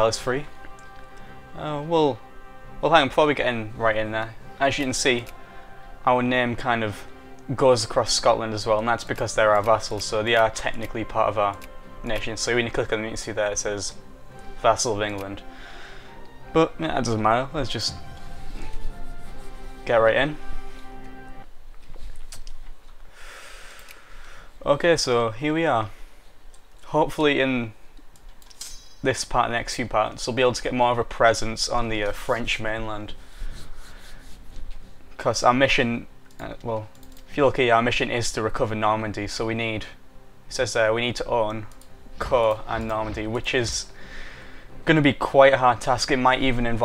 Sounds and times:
Speech: 0.0 - 0.5, 1.6 - 2.2, 2.8 - 5.3, 6.0 - 14.0, 14.6 - 15.4, 16.5 - 18.0, 19.9 - 20.4, 24.6 - 26.0, 26.8 - 27.8, 29.0 - 33.2, 35.2 - 43.9, 44.8 - 46.8.

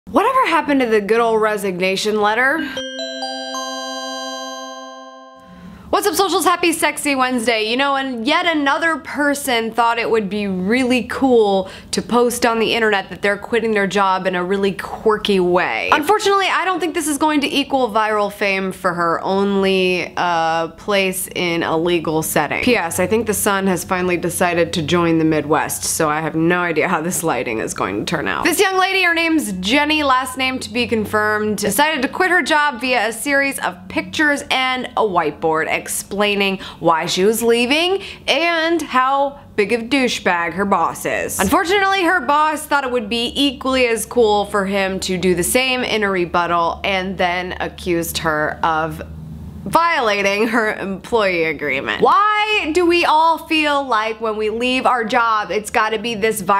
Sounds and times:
Speech: 0.1 - 2.8, 5.9 - 49.1, 49.7 - 56.5
Inside, small room: 0.1 - 56.5.

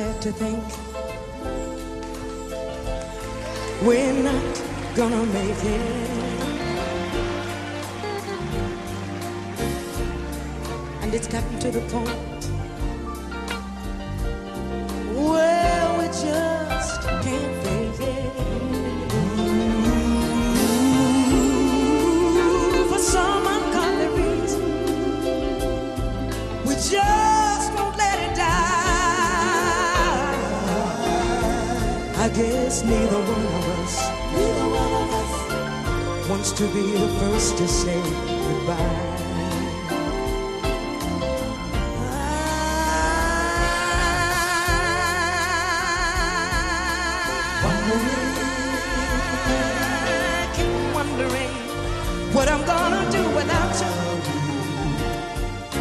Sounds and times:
Music: 0.0 - 55.8.

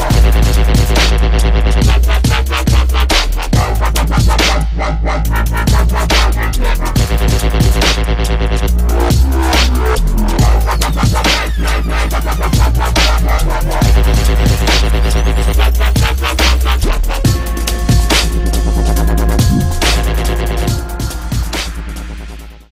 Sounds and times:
Dubstep: 0.0 - 22.7.

